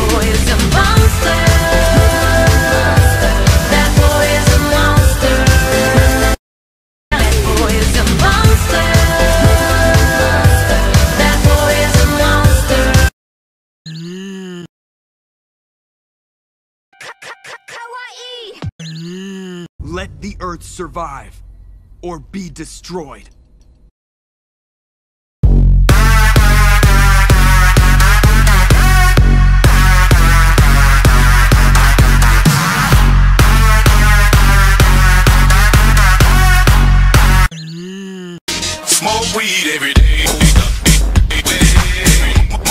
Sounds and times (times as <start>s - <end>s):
Speech: 19.4s - 21.4s, 22.0s - 23.3s.